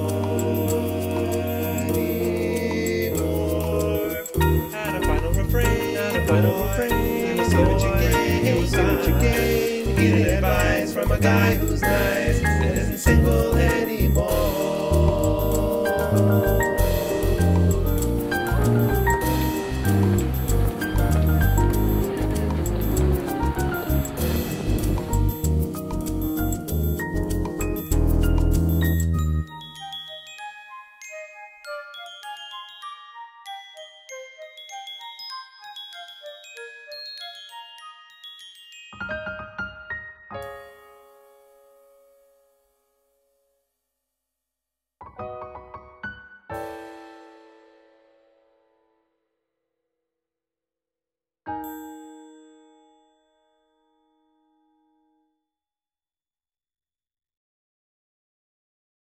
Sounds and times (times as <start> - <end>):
Jingle, tinkle: 0.0 - 41.8, 51.5 - 53.8.